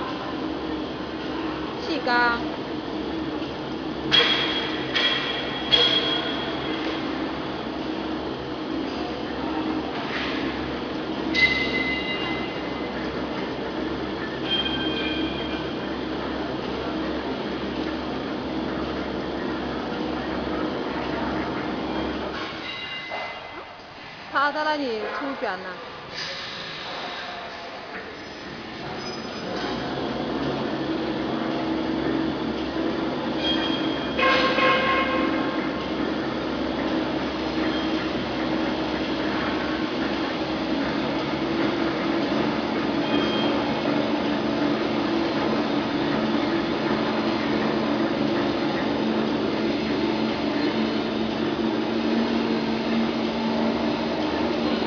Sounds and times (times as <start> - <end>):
Speech: 1.8 - 2.4, 24.4 - 25.8
Printer: 2.6 - 24.0, 26.1 - 54.8.